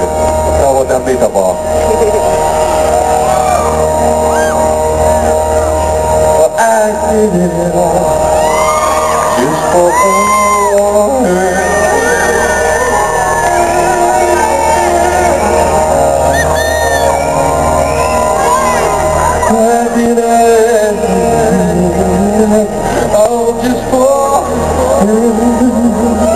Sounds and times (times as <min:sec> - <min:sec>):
Music: 0:00.0 - 0:26.3
Male singing: 0:06.4 - 0:08.3, 0:09.4 - 0:15.8, 0:19.5 - 0:26.3.